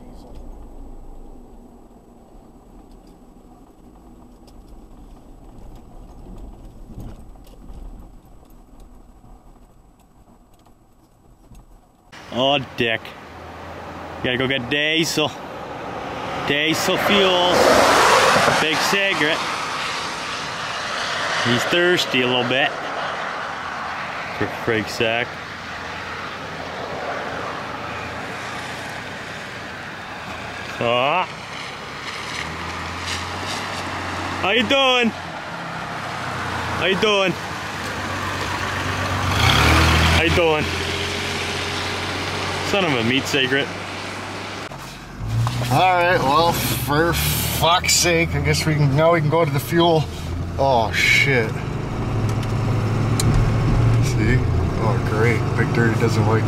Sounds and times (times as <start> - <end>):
Speech: 0.0 - 0.4, 12.3 - 13.2, 14.2 - 15.4, 16.4 - 17.8, 18.6 - 19.4, 21.4 - 22.8, 24.4 - 25.3, 30.8 - 31.3, 34.4 - 35.2, 36.8 - 37.4, 40.2 - 40.7, 42.7 - 43.7, 45.7 - 51.6, 54.0 - 56.4
Car: 0.0 - 56.4
Outside, rural or natural: 0.0 - 56.4.